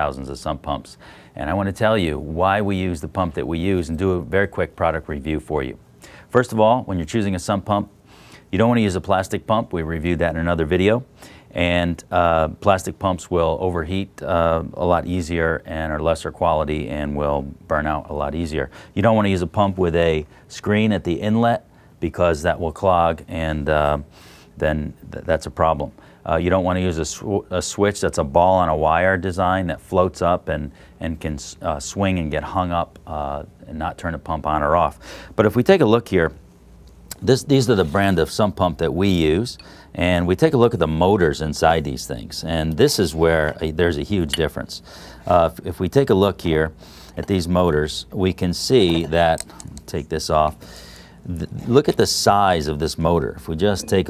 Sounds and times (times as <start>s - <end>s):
Speech: 0.0s - 36.4s, 37.1s - 50.6s, 51.2s - 54.0s.